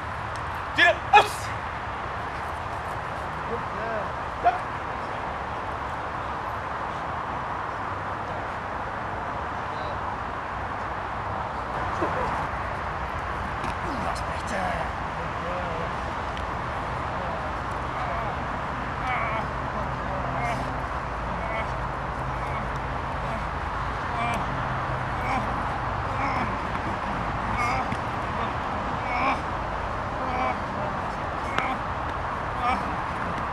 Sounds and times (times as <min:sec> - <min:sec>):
Speech: 0:03.4 - 0:04.6, 0:13.8 - 0:16.0, 0:19.0 - 0:20.7.